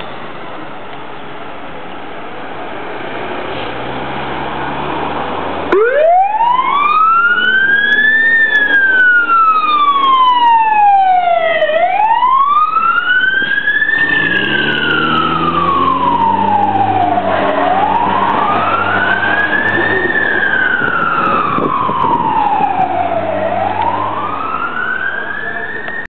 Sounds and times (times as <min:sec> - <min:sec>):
Truck: 0:00.0 - 0:11.1, 0:11.7 - 0:26.0
Speech: 0:25.0 - 0:26.0.